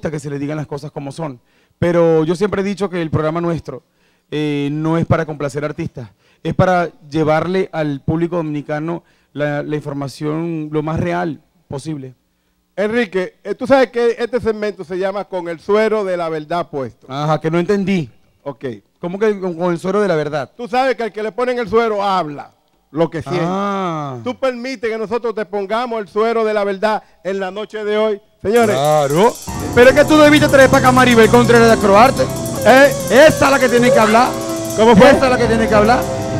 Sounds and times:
Speech: 0.0s - 12.2s, 12.8s - 36.0s.

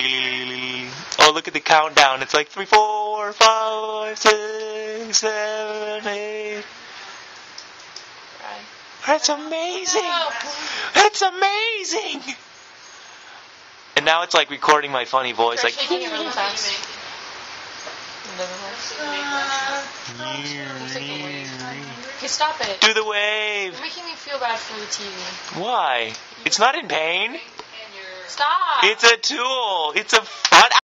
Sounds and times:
Speech: 0.0s - 4.4s, 8.4s - 12.4s, 14.0s - 16.8s, 18.3s - 30.8s.

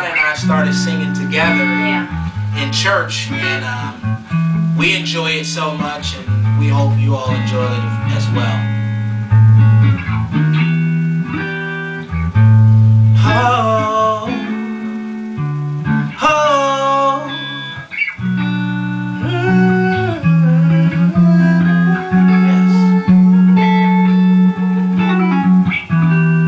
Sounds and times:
Music: 0.0s - 26.4s
Male singing: 13.2s - 14.6s, 16.2s - 17.3s.

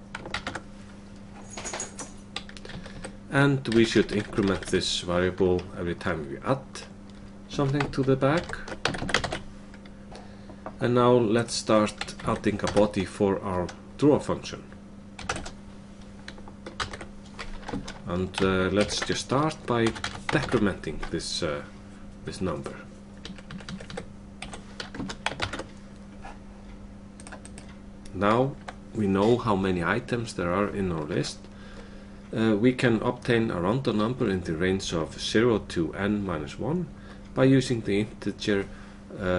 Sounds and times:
Typing: 0.1s - 0.6s, 2.4s - 4.8s, 7.6s - 9.4s, 15.2s - 15.6s, 16.3s - 19.2s, 23.2s - 25.7s, 27.2s - 27.7s
Speech: 3.3s - 6.9s, 7.5s - 8.7s, 10.8s - 14.7s, 18.0s - 22.9s, 28.1s - 31.4s, 32.3s - 39.3s.

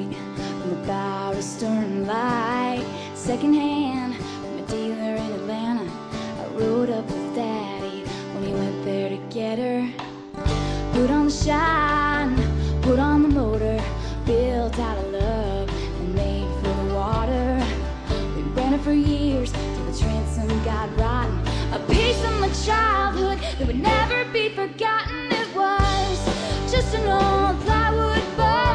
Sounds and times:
Music: 0.0s - 28.7s.

